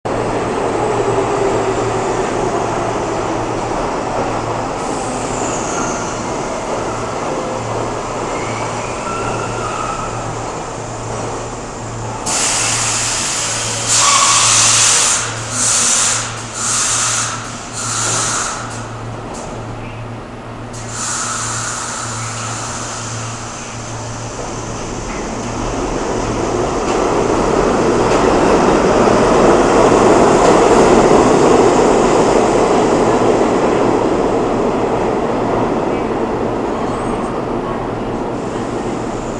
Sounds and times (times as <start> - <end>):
Train: 0.0 - 39.3
Railroad car, train wagon: 0.1 - 39.3.